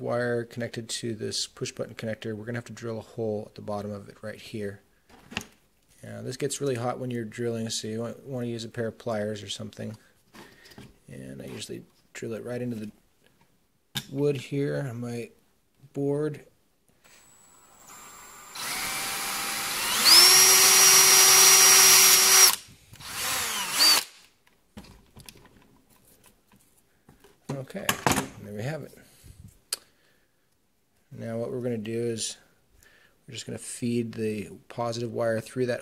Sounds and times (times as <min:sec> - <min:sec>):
Speech: 0:00.0 - 0:04.8, 0:06.0 - 0:10.0, 0:11.1 - 0:13.0, 0:14.1 - 0:16.5, 0:27.5 - 0:29.1, 0:31.1 - 0:32.5, 0:33.3 - 0:35.8
Inside, small room: 0:00.0 - 0:35.8
Drill: 0:17.0 - 0:24.3.